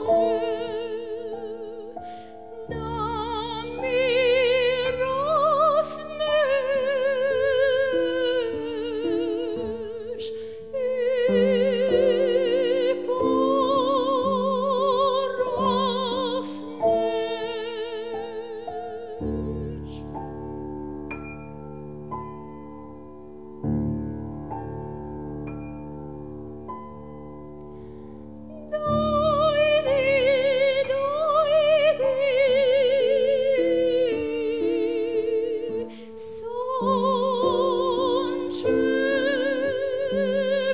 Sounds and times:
Lullaby: 0:00.0 - 0:20.1, 0:28.5 - 0:40.7.

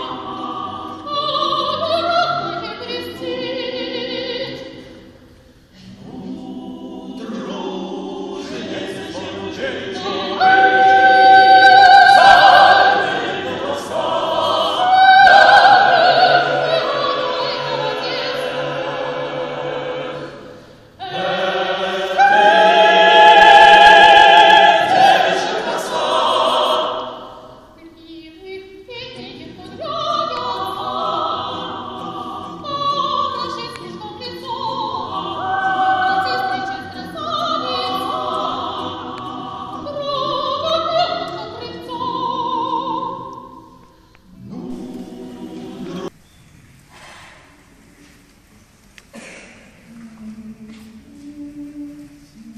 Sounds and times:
Choir: 0:00.0 - 0:46.2, 0:49.7 - 0:52.5.

